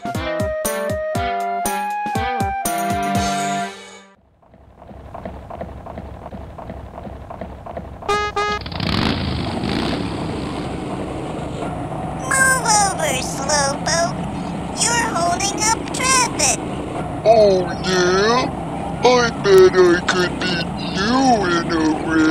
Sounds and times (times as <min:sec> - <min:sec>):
Car: 0:04.2 - 0:22.3
Speech: 0:12.2 - 0:14.2, 0:14.8 - 0:16.6, 0:17.3 - 0:22.3.